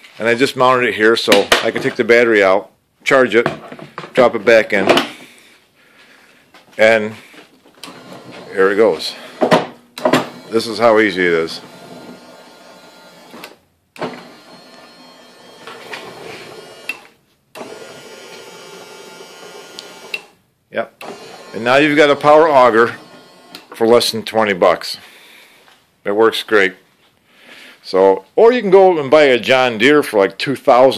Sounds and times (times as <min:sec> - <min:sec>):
Speech: 0:00.2 - 0:03.6, 0:04.2 - 0:05.0, 0:06.8 - 0:07.2, 0:08.5 - 0:09.2, 0:10.5 - 0:11.6, 0:20.7 - 0:21.0, 0:21.6 - 0:23.0, 0:23.8 - 0:25.0, 0:26.0 - 0:26.8, 0:27.8 - 0:30.9.